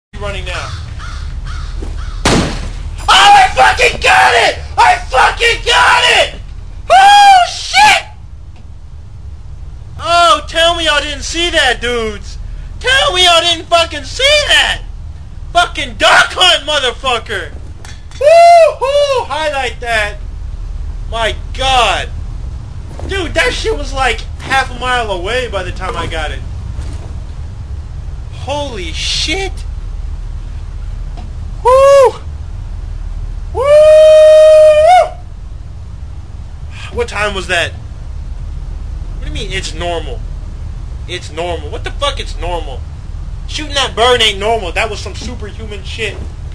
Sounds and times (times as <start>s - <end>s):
Speech: 0.2s - 0.8s, 3.1s - 8.1s, 10.0s - 14.9s, 15.5s - 17.6s, 18.8s - 20.2s, 21.1s - 22.1s, 23.1s - 26.4s, 28.3s - 29.7s, 36.7s - 37.8s, 39.2s - 40.2s, 41.1s - 42.8s, 43.5s - 46.2s.